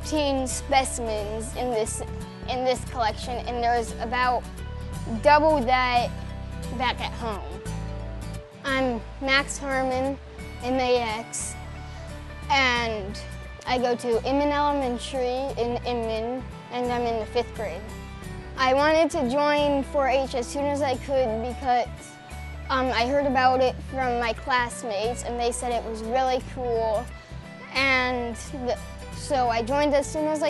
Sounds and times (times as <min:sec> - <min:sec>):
Music: 0:00.0 - 0:30.4
Speech: 0:00.1 - 0:04.4, 0:05.1 - 0:06.1, 0:06.7 - 0:07.6, 0:08.7 - 0:11.6, 0:12.5 - 0:17.9, 0:18.6 - 0:21.9, 0:22.7 - 0:27.1, 0:27.8 - 0:30.4.